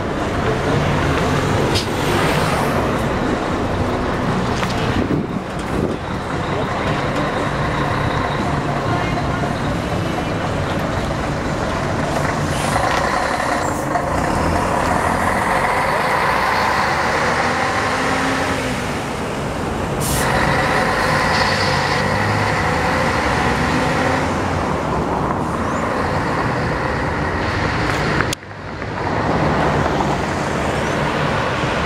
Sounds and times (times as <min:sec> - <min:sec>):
Bus: 0:00.0 - 0:31.8.